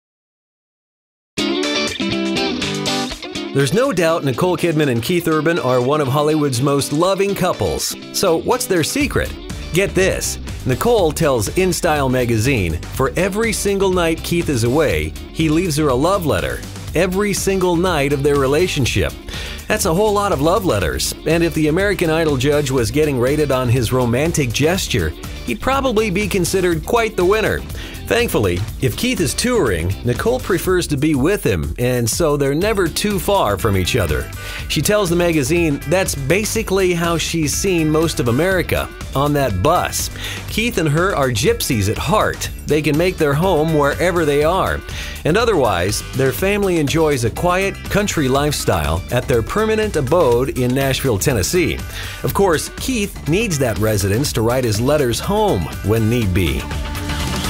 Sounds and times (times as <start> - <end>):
Music: 1.4 - 57.4
Speech: 3.6 - 56.7.